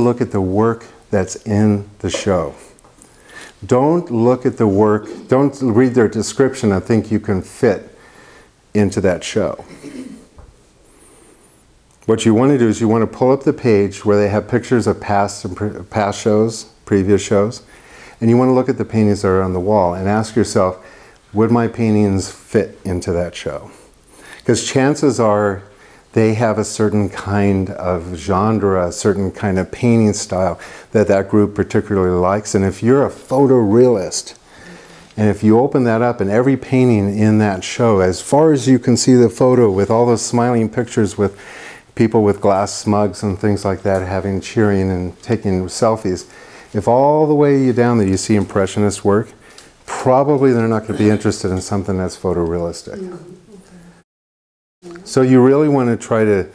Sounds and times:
Speech: 0:00.0 - 0:02.8, 0:03.6 - 0:08.0, 0:08.7 - 0:09.8, 0:12.0 - 0:23.8, 0:24.4 - 0:34.4, 0:35.2 - 0:41.4, 0:42.0 - 0:53.9, 0:54.8 - 0:56.5.

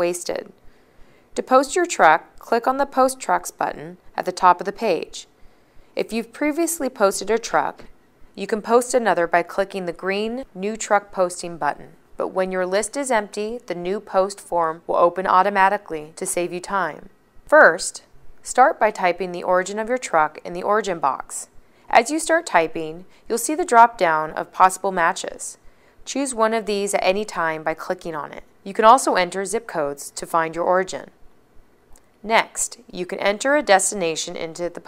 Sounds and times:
Speech: 0:00.0 - 0:00.6, 0:01.4 - 0:05.3, 0:06.0 - 0:31.2, 0:32.2 - 0:34.8.

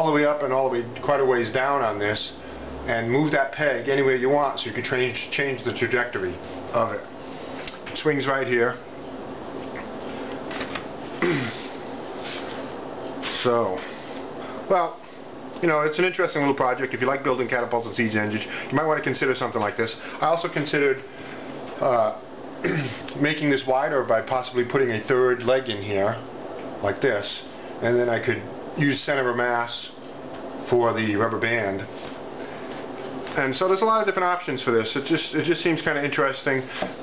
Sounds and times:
Speech: 0:00.0 - 0:07.1, 0:07.9 - 0:08.8, 0:13.3 - 0:13.9, 0:14.7 - 0:15.0, 0:15.6 - 0:21.1, 0:21.8 - 0:22.2, 0:23.2 - 0:30.0, 0:30.6 - 0:31.9, 0:33.3 - 0:36.8
Inside, small room: 0:00.0 - 0:37.0.

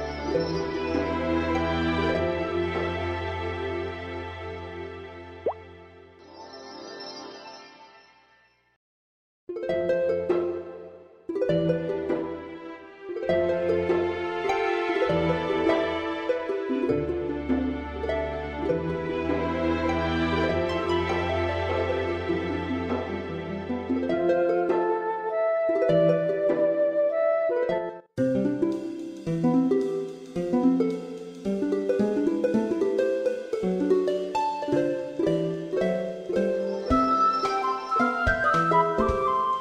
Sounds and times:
Music: 0:00.0 - 0:08.8, 0:09.5 - 0:39.6.

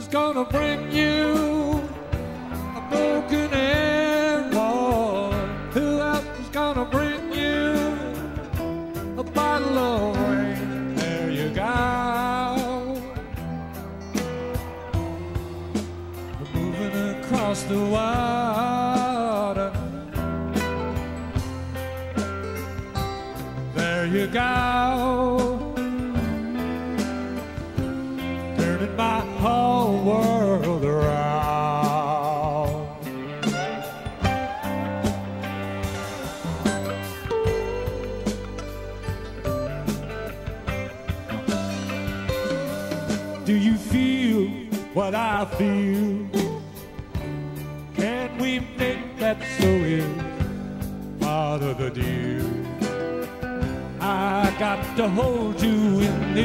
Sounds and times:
Music: 0:00.0 - 0:56.4.

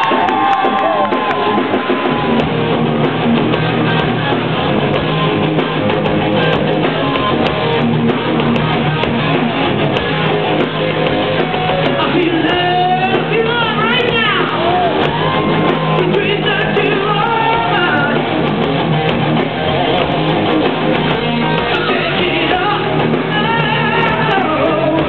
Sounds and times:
Music: 0:00.0 - 0:25.0.

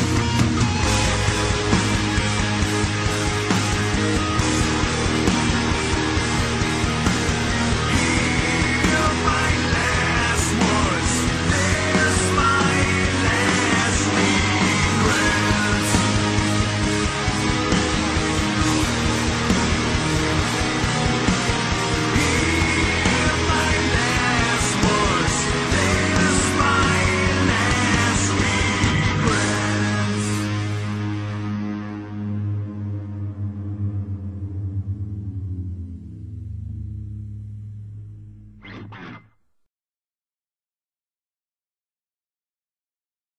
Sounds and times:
Music: 0:00.0 - 0:39.6.

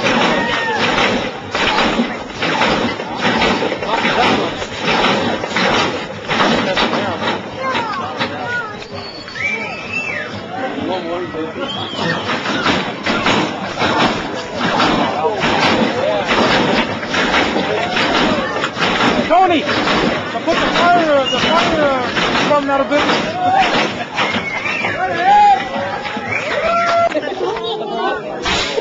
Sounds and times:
Skidding: 0:00.0 - 0:27.3
Speech: 0:17.6 - 0:23.8.

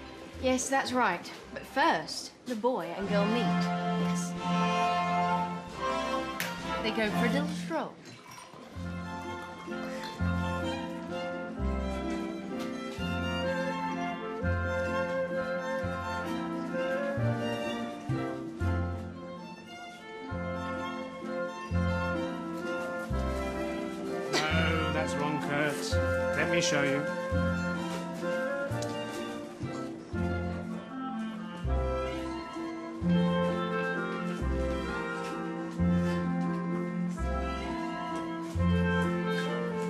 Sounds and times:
Speech: 0:00.4 - 0:03.6, 0:06.8 - 0:08.0.

